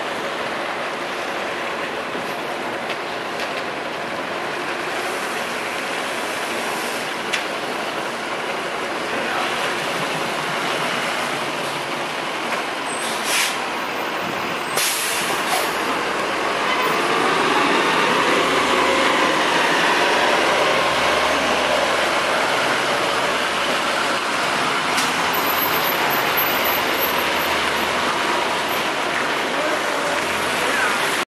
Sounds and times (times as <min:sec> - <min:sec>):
Bus: 0:00.0 - 0:31.2.